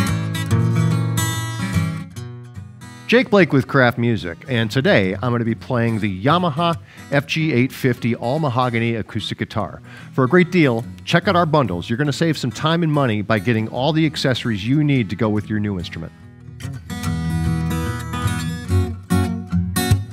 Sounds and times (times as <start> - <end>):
Acoustic guitar: 0.0 - 20.1
Speech: 3.1 - 16.1.